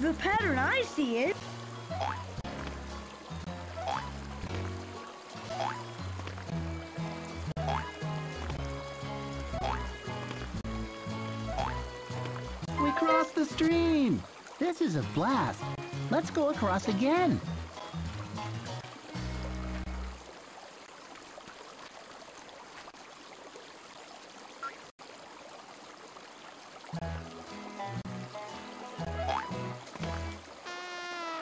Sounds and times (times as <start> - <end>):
Speech: 0.0 - 1.4, 12.8 - 17.4
Music: 0.0 - 20.3, 26.9 - 30.7.